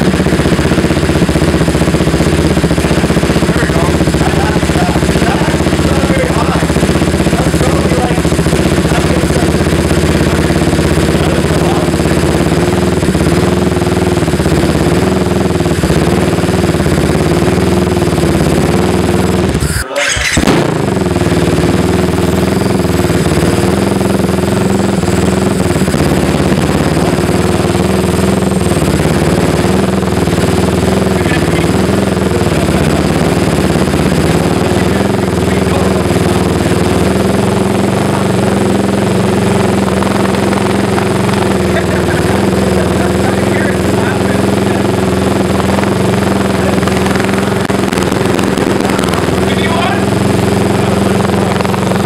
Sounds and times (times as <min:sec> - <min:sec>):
Helicopter: 0:00.0 - 0:52.0
Speech: 0:03.5 - 0:06.8, 0:07.4 - 0:08.3, 0:08.9 - 0:09.5, 0:11.3 - 0:11.9, 0:19.8 - 0:20.2, 0:31.2 - 0:31.8, 0:34.6 - 0:36.0, 0:41.8 - 0:44.8, 0:49.4 - 0:50.1.